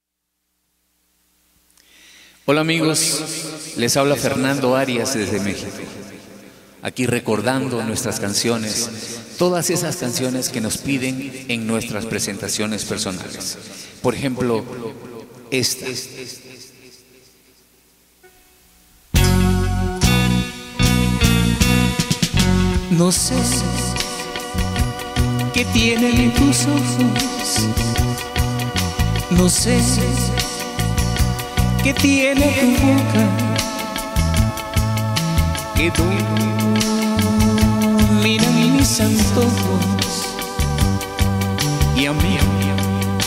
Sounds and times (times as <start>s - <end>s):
Guitar: 18.2s - 43.2s
Singing: 22.9s - 43.2s.